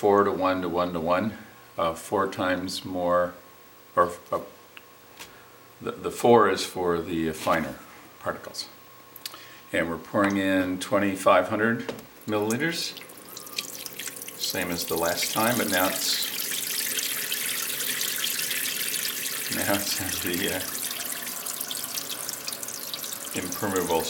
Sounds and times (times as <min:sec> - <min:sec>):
Speech: 0:00.0 - 0:03.4, 0:04.0 - 0:04.6, 0:05.8 - 0:08.8, 0:09.7 - 0:13.0, 0:14.4 - 0:16.3, 0:19.5 - 0:20.8, 0:23.4 - 0:24.0.